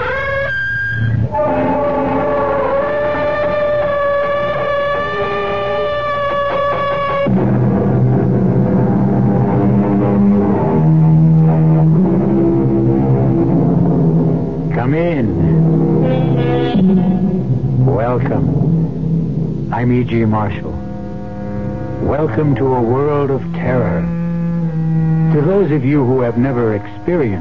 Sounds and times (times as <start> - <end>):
Music: 0.0 - 27.4
Speech: 14.7 - 15.7, 17.8 - 18.6, 19.7 - 20.8, 22.0 - 24.1, 25.3 - 27.4.